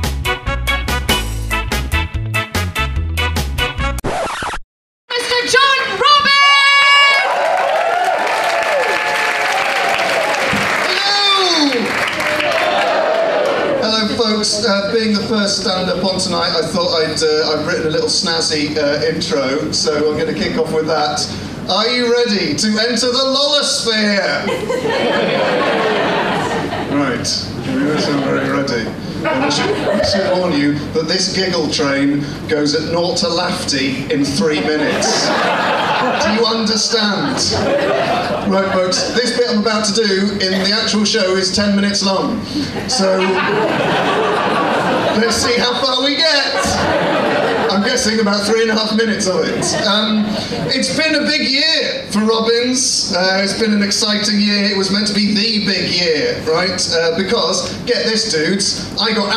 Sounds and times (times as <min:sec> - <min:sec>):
Speech: 0:10.9 - 0:11.9, 0:13.8 - 0:24.5, 0:26.9 - 0:35.4, 0:36.2 - 0:37.6, 0:38.5 - 0:43.5, 0:45.2 - 0:46.9, 0:47.7 - 0:59.3.